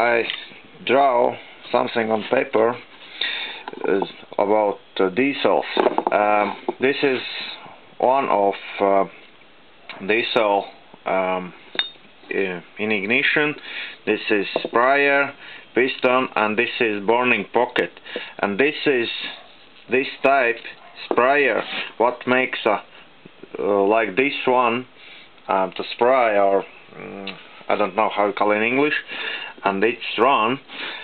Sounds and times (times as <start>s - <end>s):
Speech: 0.0s - 2.9s, 3.7s - 9.2s, 9.9s - 11.6s, 12.3s - 24.9s, 25.5s - 30.7s.